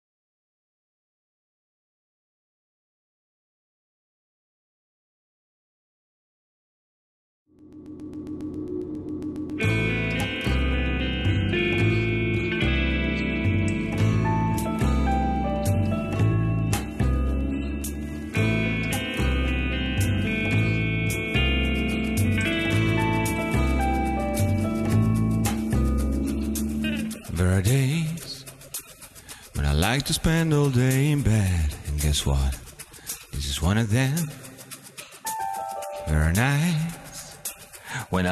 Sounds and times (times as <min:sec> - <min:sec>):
Music: 0:07.7 - 0:38.3.